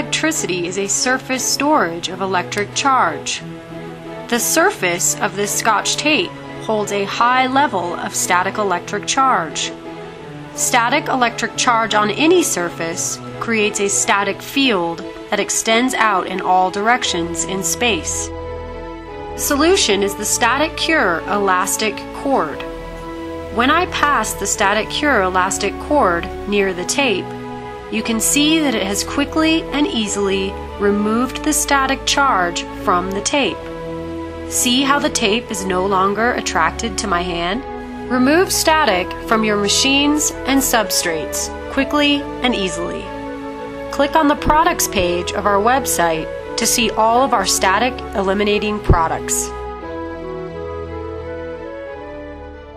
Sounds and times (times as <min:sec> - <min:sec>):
Speech: 0:00.0 - 0:03.4, 0:04.3 - 0:09.7, 0:10.6 - 0:18.3, 0:19.4 - 0:22.6, 0:23.6 - 0:27.3, 0:27.9 - 0:33.6, 0:34.5 - 0:43.1, 0:44.0 - 0:49.6
Music: 0:00.0 - 0:52.7.